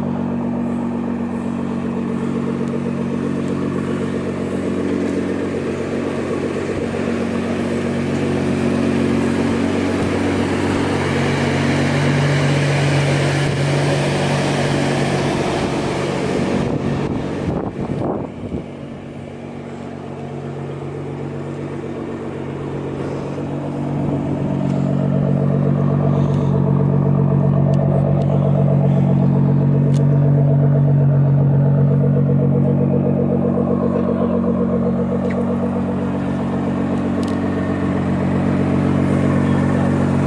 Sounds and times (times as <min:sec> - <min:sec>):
Vehicle: 0:00.0 - 0:40.2.